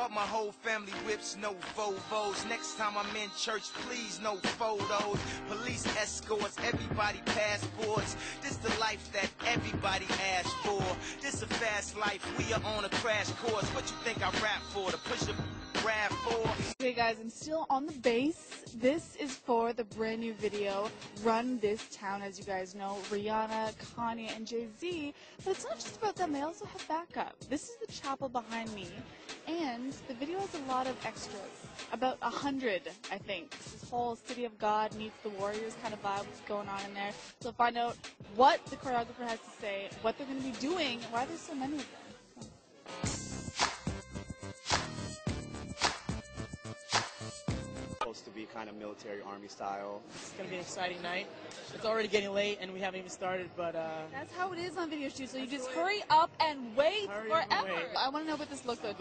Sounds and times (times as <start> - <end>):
Music: 0.0 - 59.0.